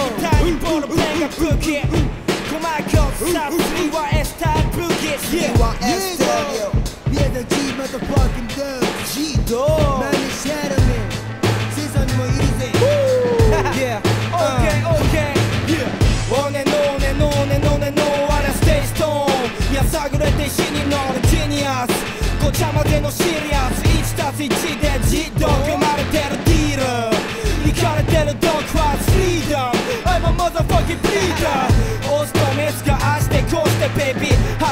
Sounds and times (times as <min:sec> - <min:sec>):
Music: 0:00.0 - 0:34.7.